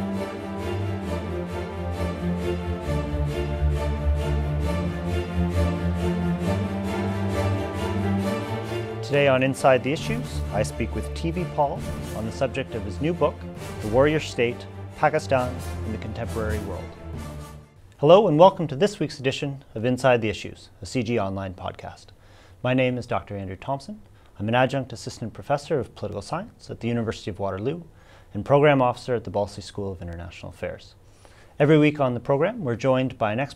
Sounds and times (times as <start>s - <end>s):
Music: 0.0s - 17.8s
Speech: 9.0s - 16.9s, 18.0s - 31.0s, 31.6s - 33.5s.